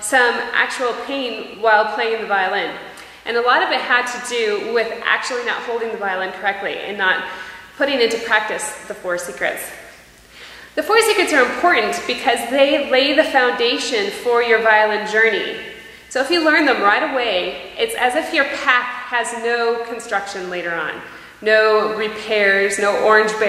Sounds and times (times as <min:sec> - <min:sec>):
Speech: 0:00.0 - 0:09.9, 0:10.8 - 0:23.4.